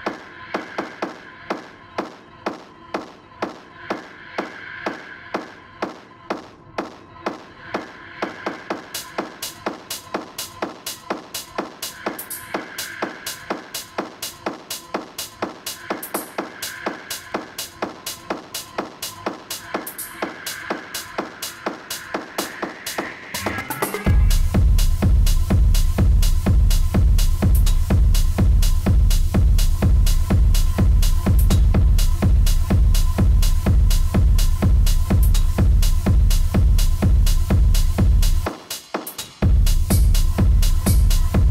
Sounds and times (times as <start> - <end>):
Techno: 0.0 - 41.5.